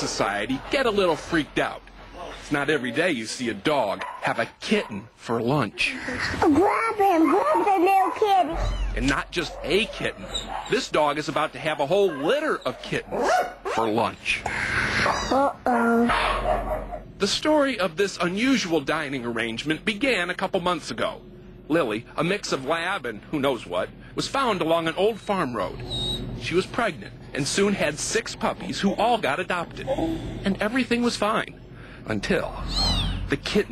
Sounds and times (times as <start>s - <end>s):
Speech: 0.0s - 14.4s, 26.4s - 33.7s.